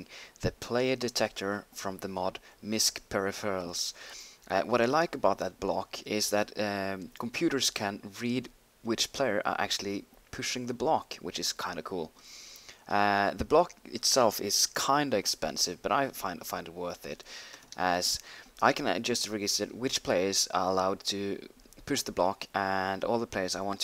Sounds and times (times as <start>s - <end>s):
Speech: 0.0s - 12.1s, 12.9s - 17.2s, 17.8s - 23.8s.